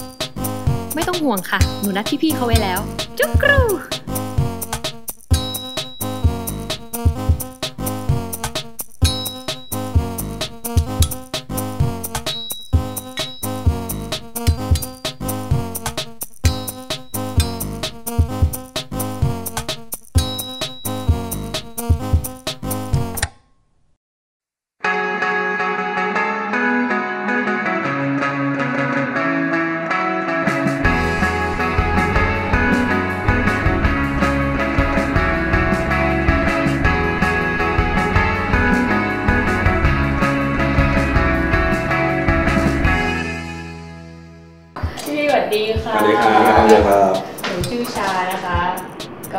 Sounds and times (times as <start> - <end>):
Music: 0.0 - 23.3, 24.8 - 49.3.